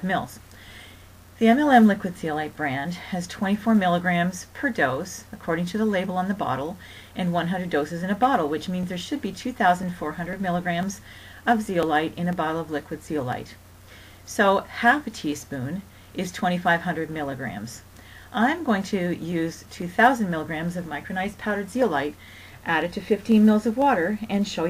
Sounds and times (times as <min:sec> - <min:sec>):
Speech: 0:00.0 - 0:00.4, 0:01.4 - 0:13.6, 0:14.3 - 0:24.6.